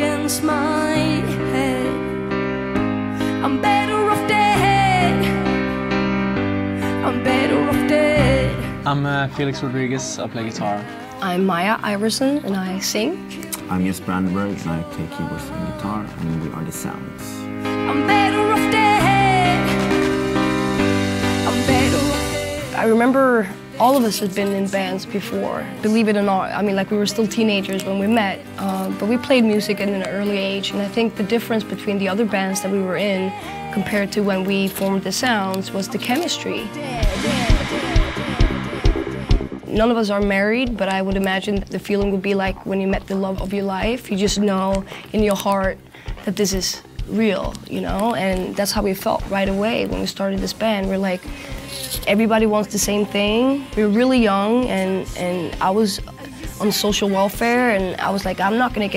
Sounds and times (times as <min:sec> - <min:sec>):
Music: 0:00.0 - 0:58.9.